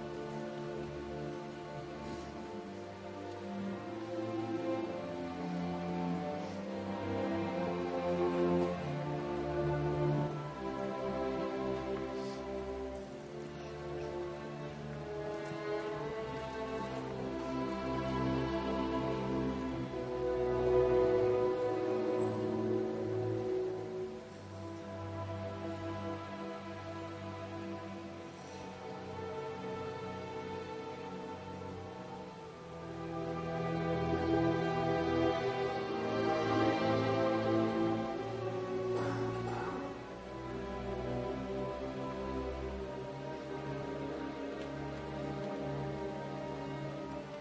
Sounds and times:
Violin, fiddle: 0:00.0 - 0:47.4.

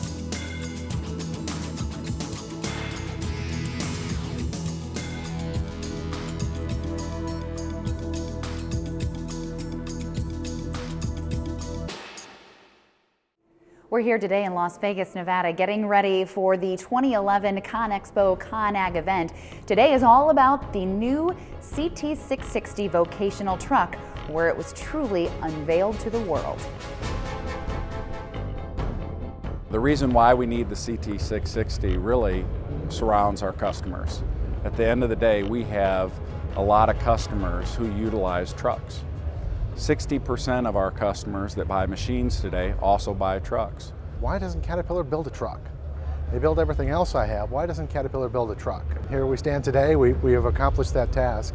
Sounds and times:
Music: 0:00.0 - 0:14.2, 0:17.6 - 0:43.8
Speech: 0:29.7 - 0:39.0, 0:46.3 - 0:51.5.

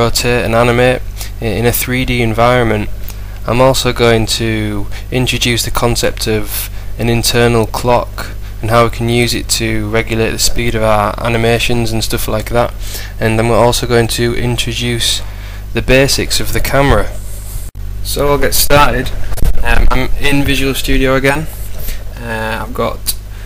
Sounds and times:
Speech: 0:00.0 - 0:17.2, 0:18.0 - 0:21.6, 0:22.2 - 0:23.2.

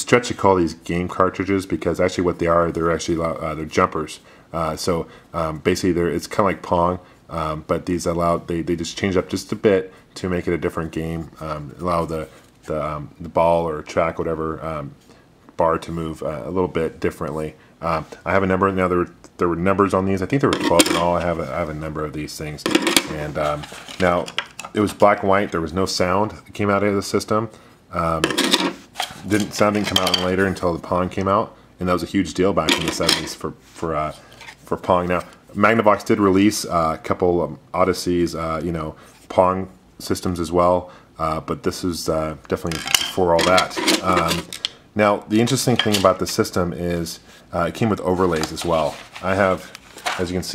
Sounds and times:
Speech: 0:00.0 - 0:15.0, 0:15.6 - 0:28.6, 0:29.2 - 0:50.5
Inside, small room: 0:00.0 - 0:50.5.

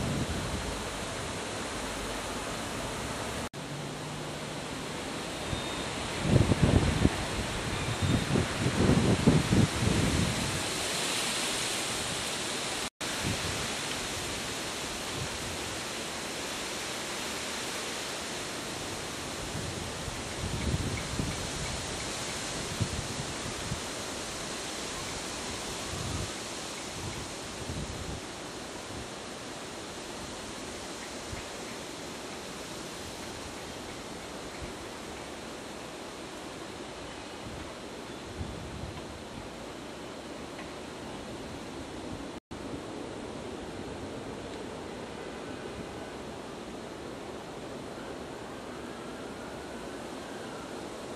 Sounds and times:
Wind noise (microphone): 0:00.0 - 0:00.8, 0:06.2 - 0:10.8, 0:13.1 - 0:13.8, 0:19.4 - 0:23.9, 0:25.7 - 0:28.3, 0:38.3 - 0:39.2.

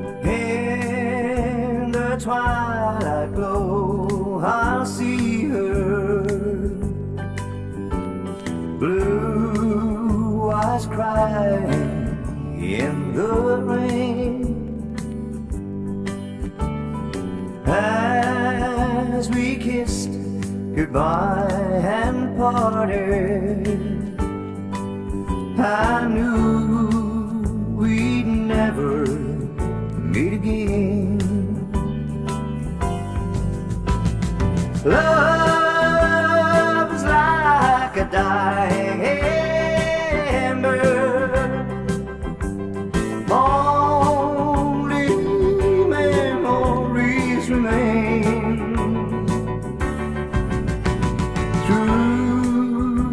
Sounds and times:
Music: 0:00.0 - 0:53.1.

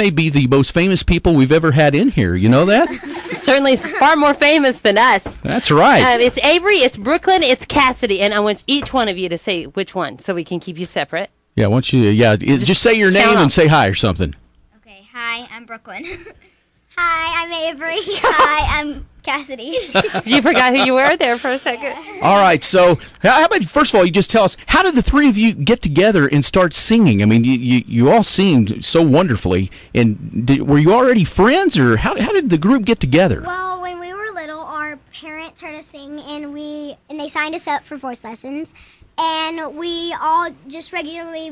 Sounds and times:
Speech: 0:00.0 - 0:14.4, 0:20.2 - 0:33.5.

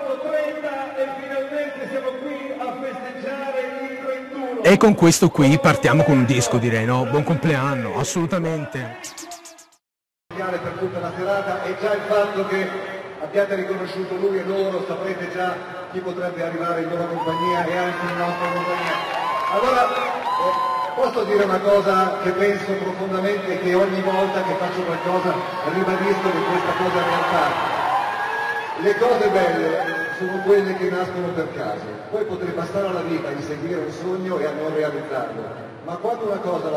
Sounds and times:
Speech: 0:00.0 - 0:09.8
Radio: 0:04.7 - 0:09.8.

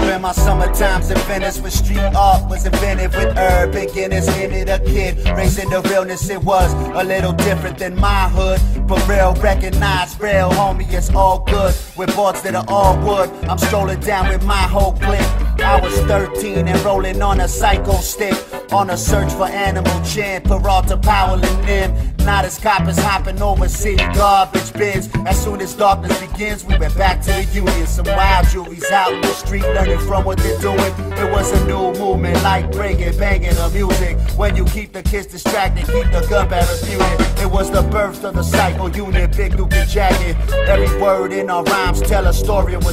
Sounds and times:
Dance music: 0:00.0 - 0:07.7, 0:11.3 - 0:20.5, 0:23.9 - 0:42.9.

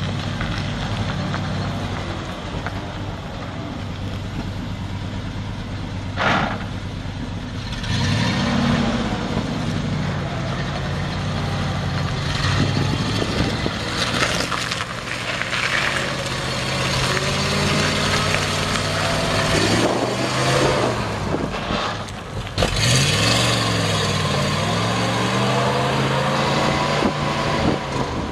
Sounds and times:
Truck: 0:00.0 - 0:28.3.

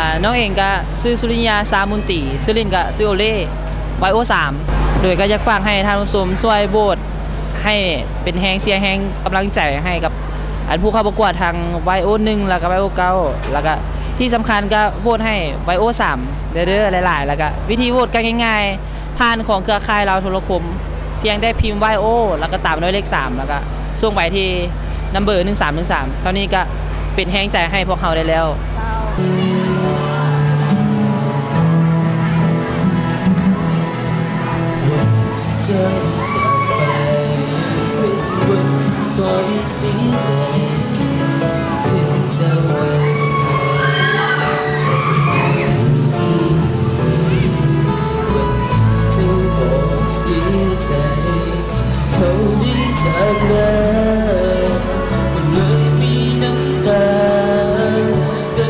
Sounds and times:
Music: 0:00.0 - 0:18.4, 0:26.4 - 0:58.7
Male singing: 0:29.2 - 0:29.8, 0:34.8 - 0:58.7.

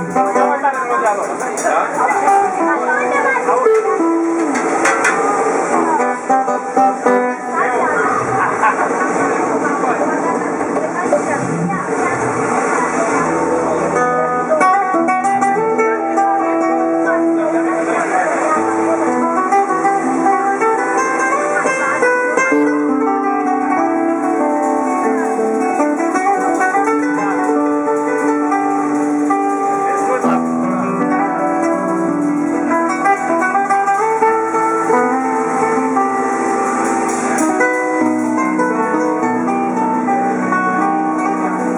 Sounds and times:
Speech: 0:00.0 - 0:04.5, 0:05.8 - 0:15.0, 0:16.2 - 0:20.1, 0:29.5 - 0:31.3
Acoustic guitar: 0:00.0 - 0:41.7
Strum: 0:00.0 - 0:41.7.

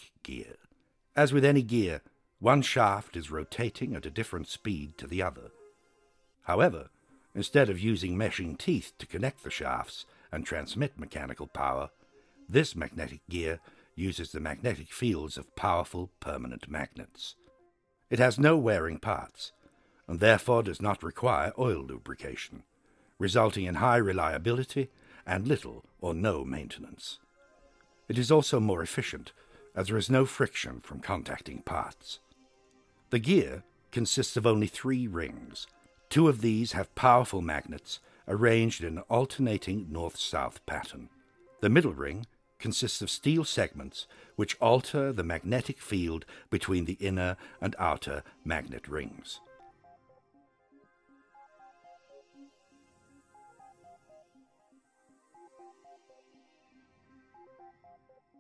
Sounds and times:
Speech: 0:00.0 - 0:05.5, 0:06.5 - 0:11.9, 0:12.5 - 0:17.4, 0:18.1 - 0:22.6, 0:23.2 - 0:27.2, 0:28.1 - 0:32.2, 0:33.2 - 0:49.4.

